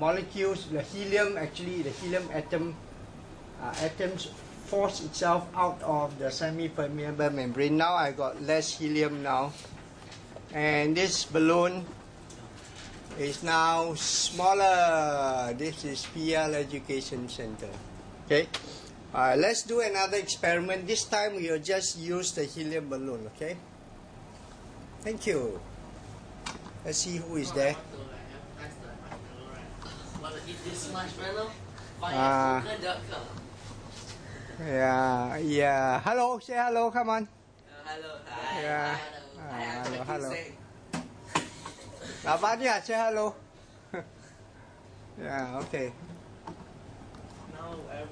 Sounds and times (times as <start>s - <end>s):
Speech: 0.0s - 2.8s, 3.6s - 9.6s, 25.0s - 25.6s, 26.8s - 33.4s, 34.6s - 40.5s.